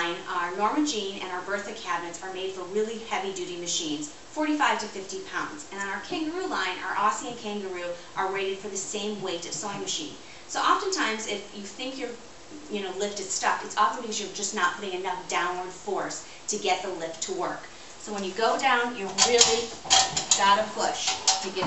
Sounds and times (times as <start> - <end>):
Speech: 0.0 - 21.6.